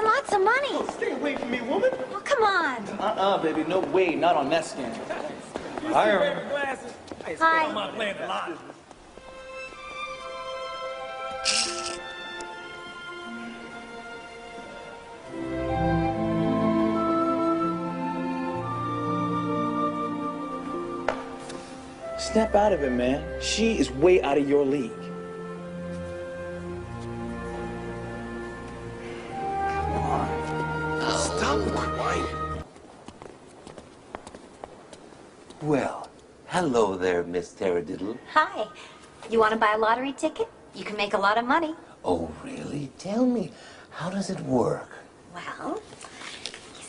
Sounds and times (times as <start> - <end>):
Music: 9.2 - 32.7.